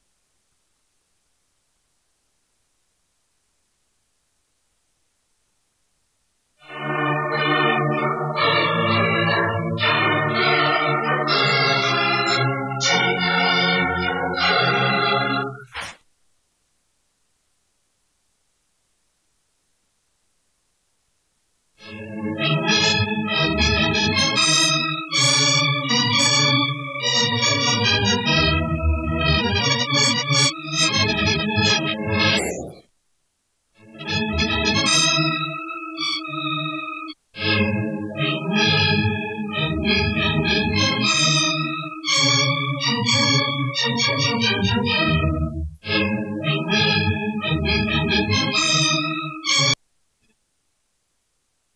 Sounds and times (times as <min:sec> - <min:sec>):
Music: 0:06.6 - 0:15.6, 0:21.8 - 0:32.4, 0:33.8 - 0:49.8.